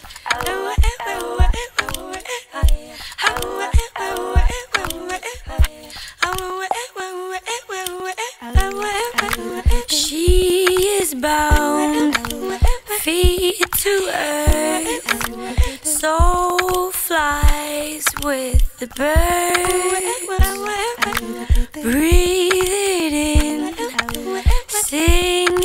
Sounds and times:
Music: 0:00.0 - 0:08.0, 0:08.6 - 0:25.6.

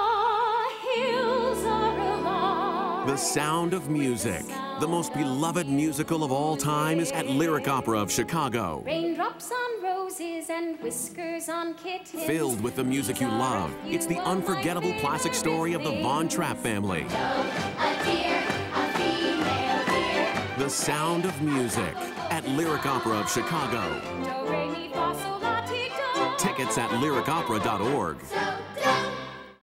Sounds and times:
Music: 0:00.0 - 0:29.6
Speech: 0:03.1 - 0:09.2, 0:12.2 - 0:17.1, 0:20.6 - 0:24.0, 0:26.4 - 0:28.3.

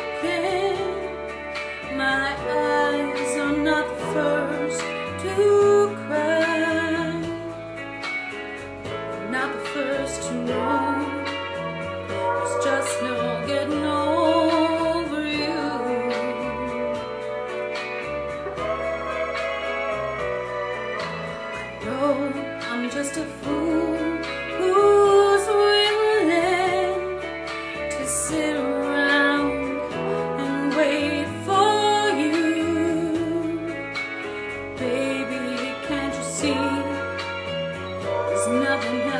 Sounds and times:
Female singing: 0:00.0 - 0:01.3, 0:01.9 - 0:07.5, 0:09.2 - 0:11.4, 0:12.2 - 0:17.0, 0:21.8 - 0:27.2, 0:27.9 - 0:33.8, 0:34.8 - 0:37.3, 0:38.2 - 0:39.1
Music: 0:00.0 - 0:39.1.

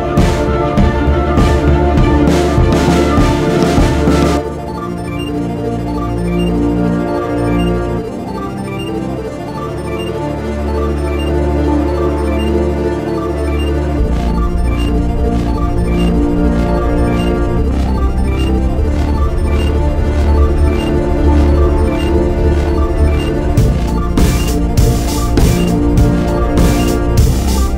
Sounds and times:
Music: 0:00.0 - 0:27.7.

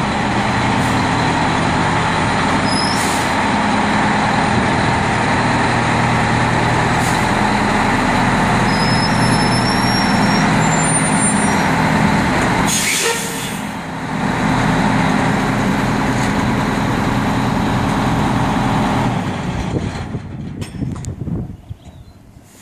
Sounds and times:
Air brake: 0:02.8 - 0:03.4, 0:12.7 - 0:13.6.

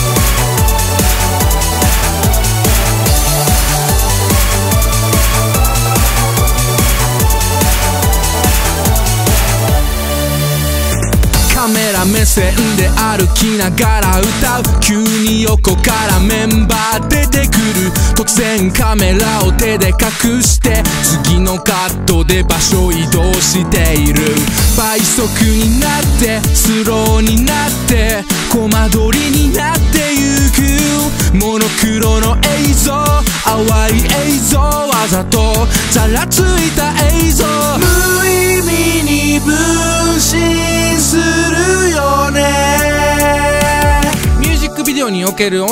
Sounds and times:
Music: 0:00.0 - 0:45.7.

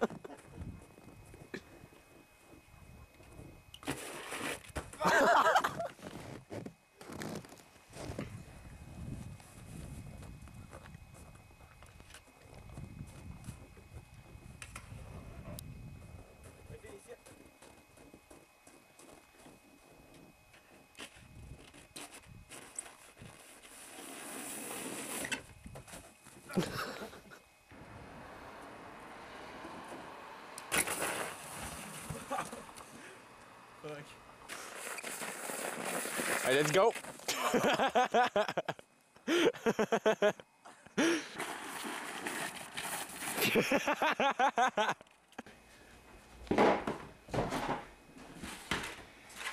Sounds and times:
Outside, rural or natural: 0:00.0 - 0:49.5
Speech: 0:16.7 - 0:17.3, 0:36.4 - 0:37.0.

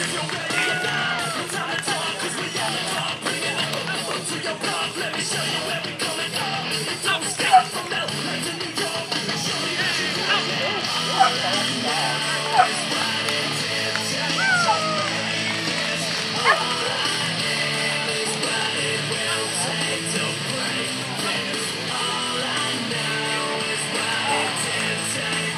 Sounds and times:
Speech: 0:00.0 - 0:13.0, 0:18.5 - 0:24.9
Music: 0:00.0 - 0:25.5
Bow-wow: 0:11.1 - 0:11.4, 0:12.5 - 0:12.8, 0:16.4 - 0:16.7
Yip: 0:11.2 - 0:11.4.

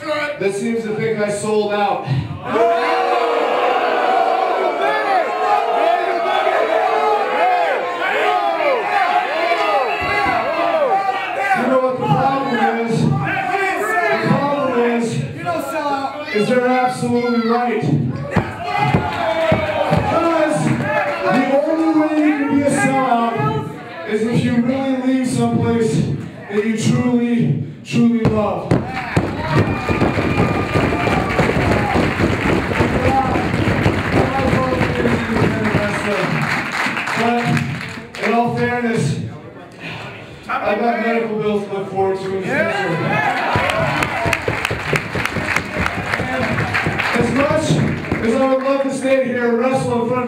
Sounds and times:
Speech: 0:00.0 - 0:02.1, 0:11.4 - 0:18.4, 0:20.0 - 0:28.7, 0:34.2 - 0:36.4, 0:37.1 - 0:43.2, 0:47.1 - 0:50.2.

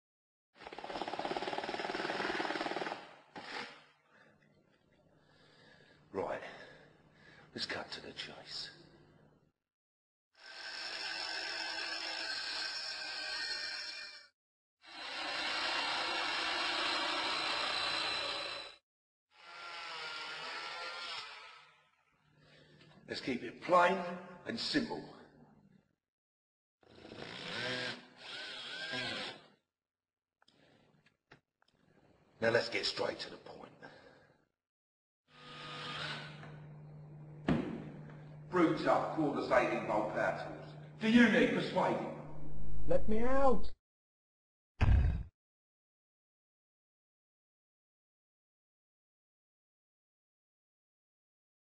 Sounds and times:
Speech: 0:06.2 - 0:06.6, 0:07.5 - 0:08.8, 0:23.1 - 0:25.2, 0:32.4 - 0:33.8, 0:38.5 - 0:42.2, 0:42.9 - 0:43.8.

